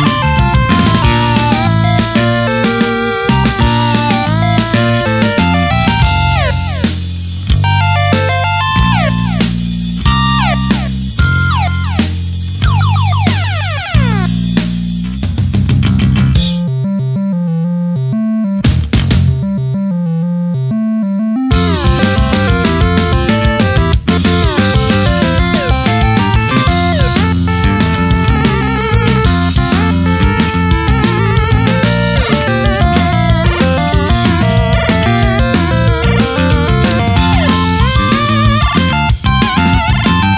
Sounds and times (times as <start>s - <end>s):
Theme music: 0.0s - 14.7s, 19.3s - 40.3s.